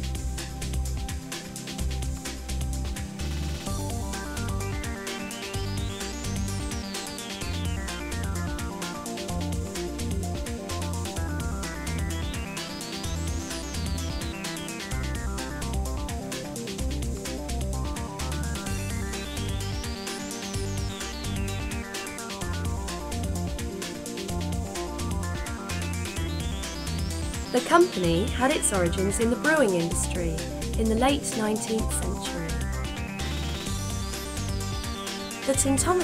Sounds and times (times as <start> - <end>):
Music: 0.0 - 36.0.